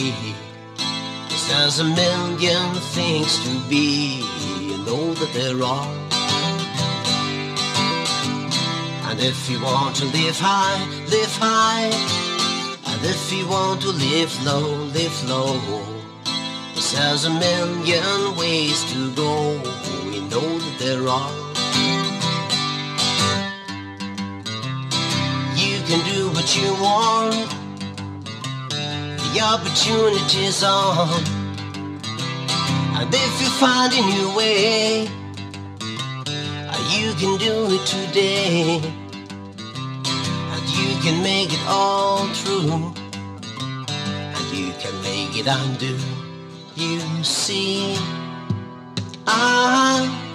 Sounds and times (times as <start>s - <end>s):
Music: 0.0s - 50.3s.